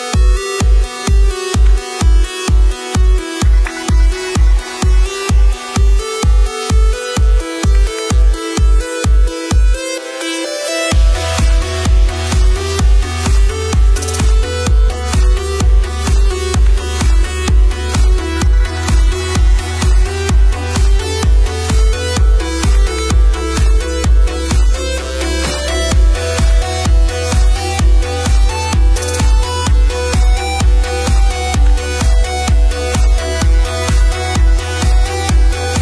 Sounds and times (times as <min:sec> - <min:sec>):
Music: 0:00.0 - 0:35.8.